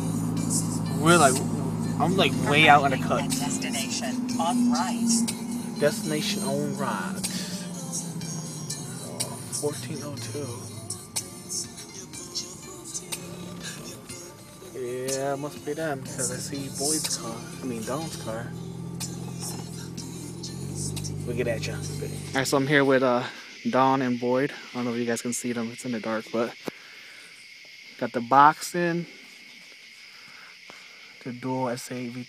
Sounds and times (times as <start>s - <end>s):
Speech: 1.0s - 1.4s, 2.0s - 5.0s, 5.8s - 7.4s, 9.1s - 10.6s, 14.8s - 18.5s, 21.3s - 26.6s, 28.0s - 29.1s, 31.2s - 32.2s.